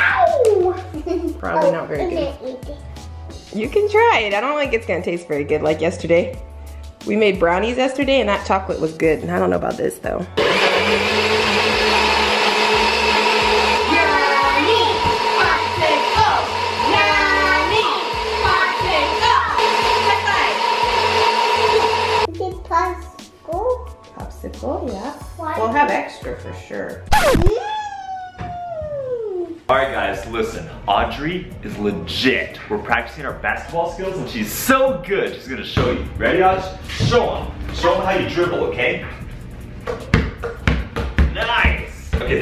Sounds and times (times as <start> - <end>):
Blender: 10.4 - 22.3.